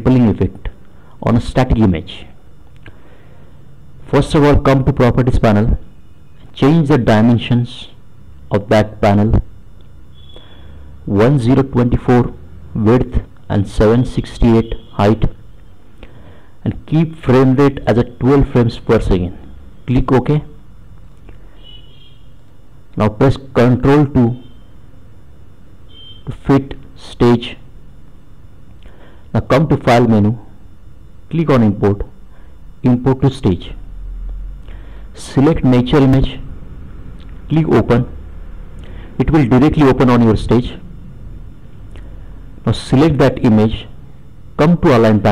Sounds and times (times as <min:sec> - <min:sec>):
Speech: 0:00.0 - 0:02.4, 0:04.0 - 0:05.9, 0:06.5 - 0:09.5, 0:11.1 - 0:15.4, 0:16.6 - 0:20.6, 0:23.0 - 0:24.4, 0:26.3 - 0:27.7, 0:29.4 - 0:30.5, 0:31.3 - 0:32.2, 0:32.8 - 0:33.8, 0:35.2 - 0:36.5, 0:37.5 - 0:38.2, 0:39.2 - 0:40.9, 0:42.6 - 0:44.0, 0:44.6 - 0:45.3.